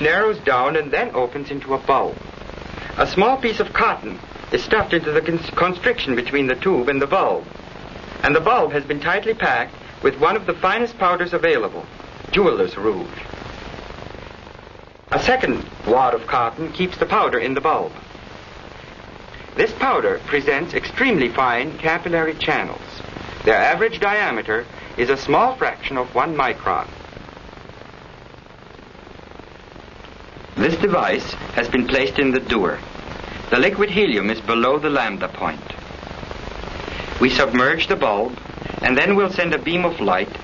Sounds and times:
Speech: 0.0s - 2.2s, 2.9s - 7.5s, 8.2s - 13.3s, 15.1s - 18.0s, 19.6s - 27.0s, 30.6s - 35.8s, 37.2s - 40.4s.

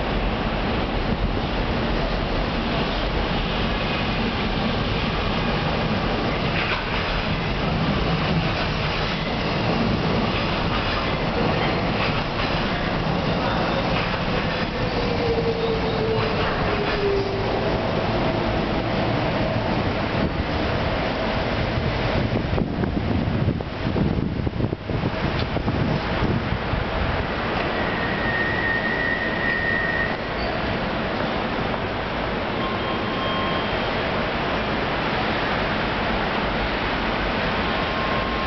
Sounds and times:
Train: 0.0s - 38.4s.

